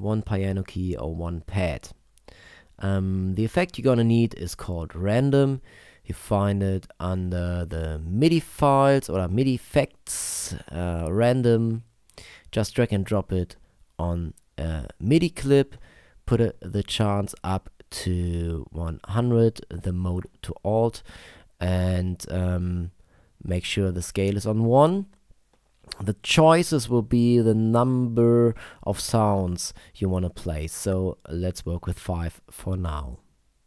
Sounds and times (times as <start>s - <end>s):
Speech: 0.0s - 2.0s, 2.8s - 11.9s, 12.5s - 21.0s, 21.6s - 25.2s, 25.9s - 33.3s.